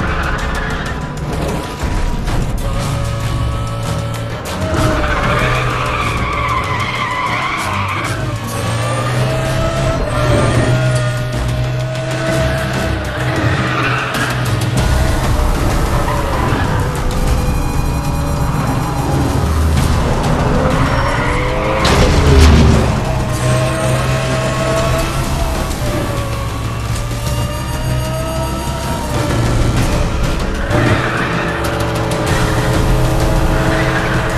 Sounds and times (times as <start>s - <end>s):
Music: 0.0s - 34.3s.